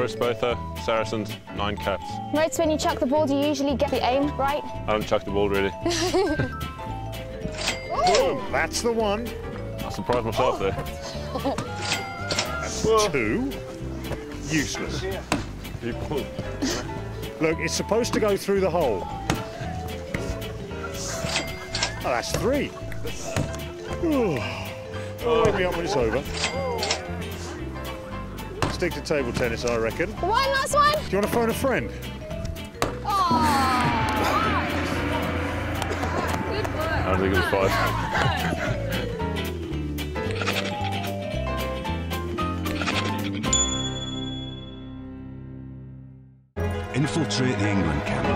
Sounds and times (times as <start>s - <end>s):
Music: 0.0s - 48.3s.